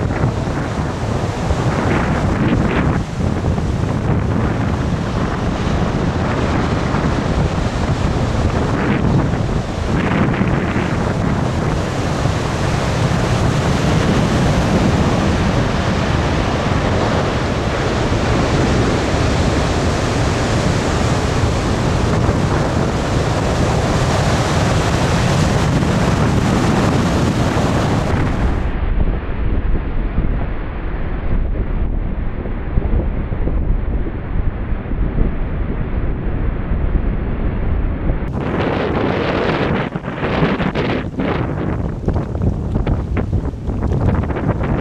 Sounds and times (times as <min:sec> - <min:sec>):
Waves, surf: 0:00.0 - 0:44.8.